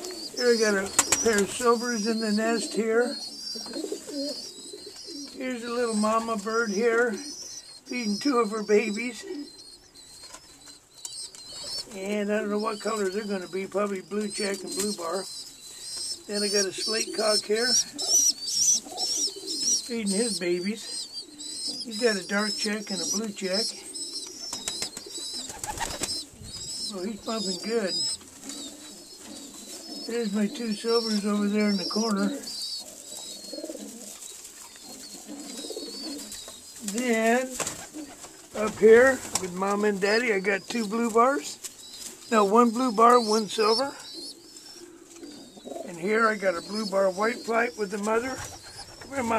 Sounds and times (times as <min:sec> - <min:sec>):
Pigeon, dove: 0:00.0 - 0:49.3
Speech: 0:11.9 - 0:15.3, 0:38.6 - 0:41.6, 0:45.9 - 0:48.4, 0:49.1 - 0:49.3.